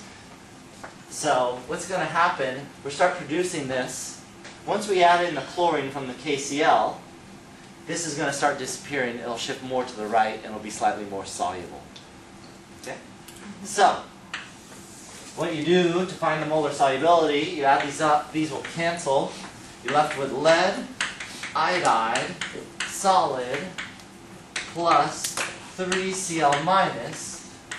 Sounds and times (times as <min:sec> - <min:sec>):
Speech: 0:01.1 - 0:07.0, 0:07.9 - 0:12.0, 0:12.8 - 0:14.1, 0:15.4 - 0:21.0, 0:21.6 - 0:23.8, 0:24.6 - 0:27.5.